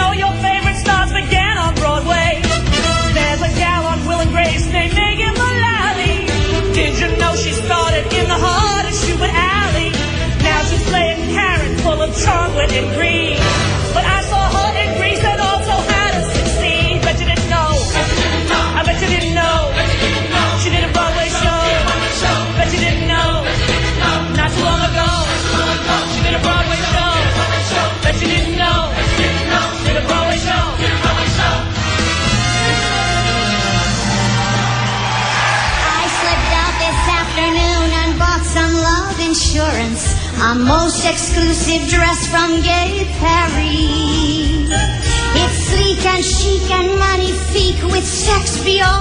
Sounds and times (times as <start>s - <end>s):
Female singing: 0.0s - 2.5s, 3.1s - 25.4s, 35.7s - 49.0s
Choir: 12.3s - 38.1s.